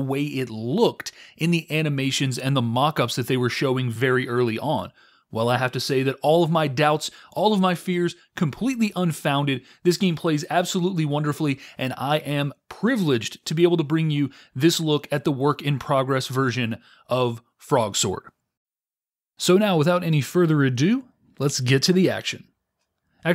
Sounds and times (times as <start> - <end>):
Speech: 0.0 - 18.4, 19.4 - 22.5.